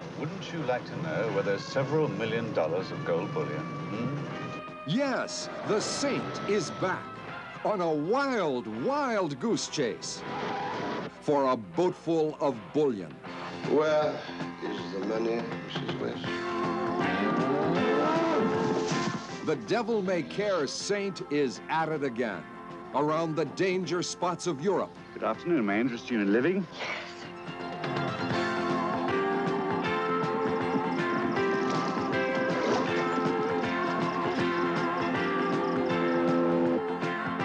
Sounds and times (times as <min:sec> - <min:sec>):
Music: 0:00.0 - 0:37.4.